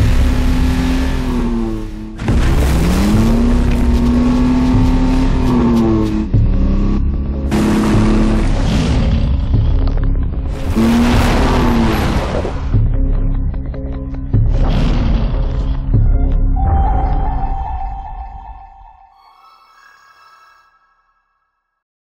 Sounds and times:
Music: 0:00.0 - 0:21.8.

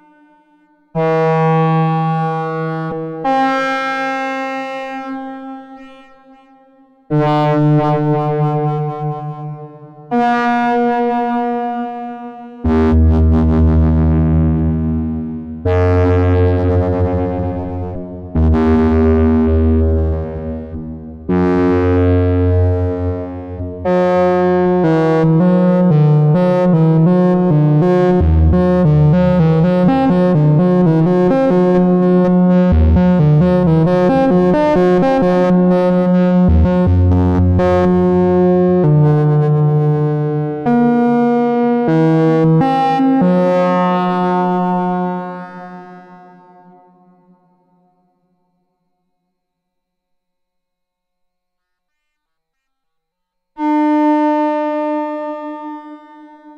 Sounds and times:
Music: 0:00.0 - 0:56.5.

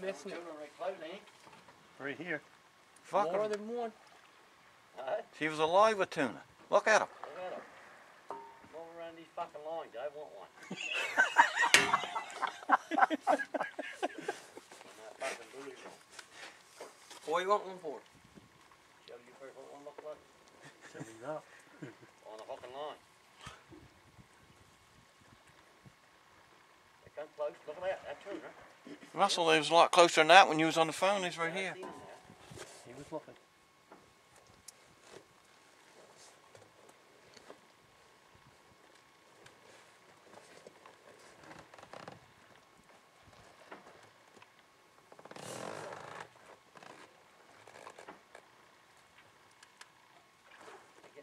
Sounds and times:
Stream: 0:00.0 - 0:32.5.

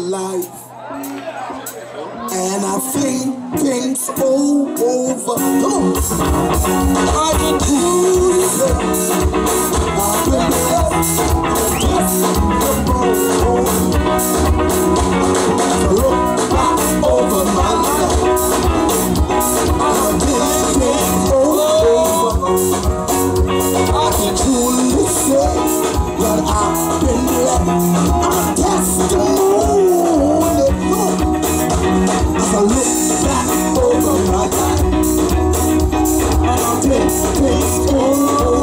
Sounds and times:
Music of Latin America: 0:00.0 - 0:38.6
Singing: 0:15.6 - 0:22.9, 0:23.7 - 0:31.4, 0:32.2 - 0:35.4, 0:36.1 - 0:38.6.

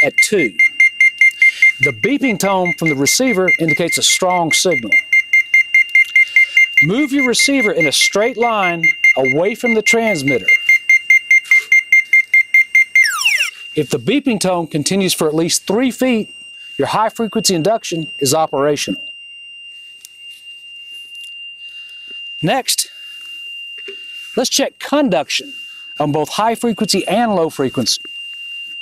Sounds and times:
Speech: 0:00.0 - 0:00.6, 0:01.8 - 0:05.0, 0:06.8 - 0:10.6, 0:13.8 - 0:19.1, 0:22.4 - 0:22.9, 0:24.4 - 0:28.0
Alarm: 0:00.0 - 0:28.8.

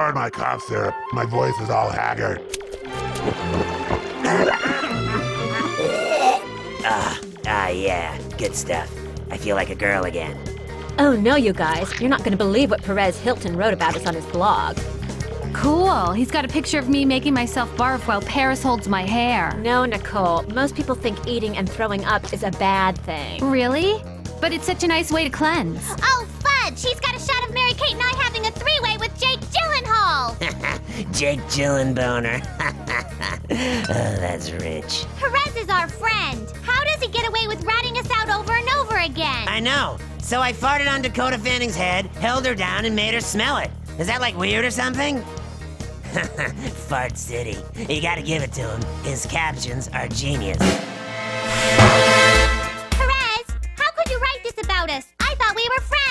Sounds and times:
Music: 0:00.0 - 0:56.1.

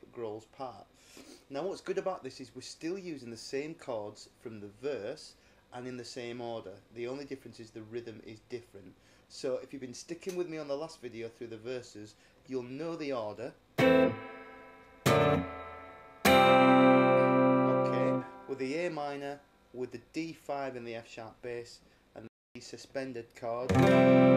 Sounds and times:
Speech: 0:00.0 - 0:00.9, 0:01.5 - 0:13.6, 0:17.8 - 0:23.7.

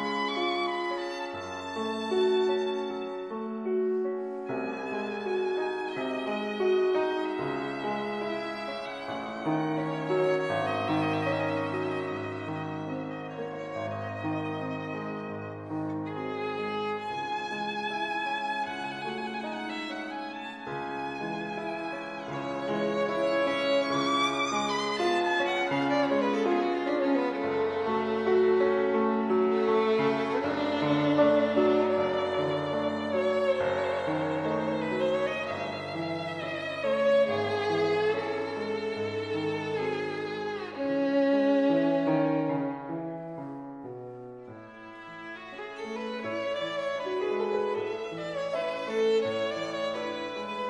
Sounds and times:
Violin, fiddle: 0:00.0 - 0:50.6.

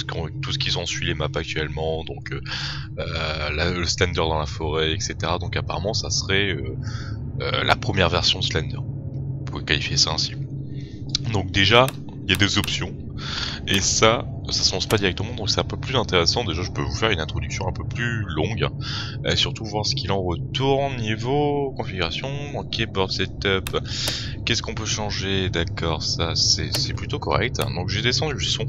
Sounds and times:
Speech: 0:00.0 - 0:08.8, 0:09.5 - 0:10.4, 0:11.1 - 0:28.6.

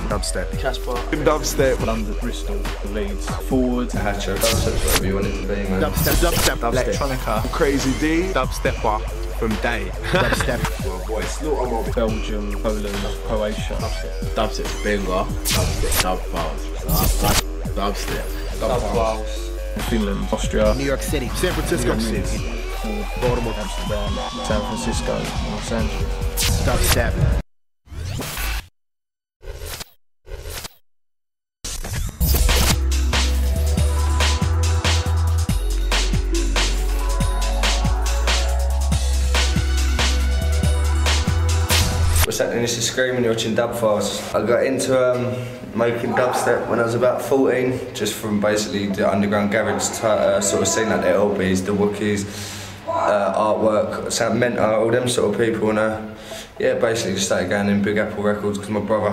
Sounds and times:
Speech: 0:00.0 - 0:26.0, 0:26.6 - 0:27.3, 0:42.3 - 0:52.3, 0:52.9 - 0:59.1
Dubstep: 0:00.0 - 0:27.4, 0:31.7 - 0:42.3.

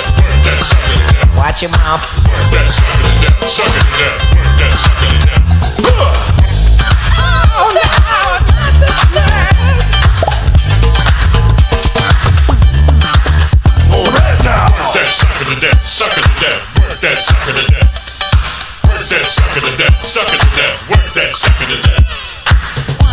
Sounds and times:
Disco: 0:00.0 - 0:23.1
Funk: 0:00.0 - 0:23.1.

